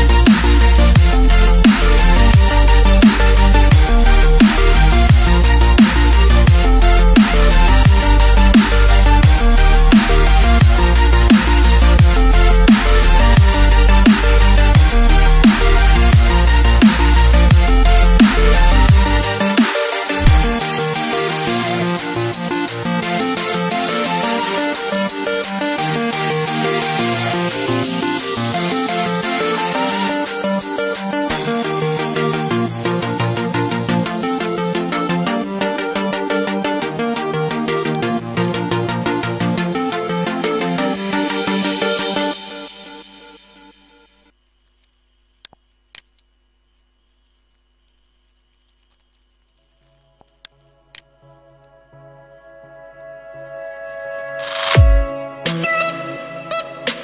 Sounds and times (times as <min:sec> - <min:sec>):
Music: 0:00.0 - 0:44.3, 0:48.8 - 0:57.0.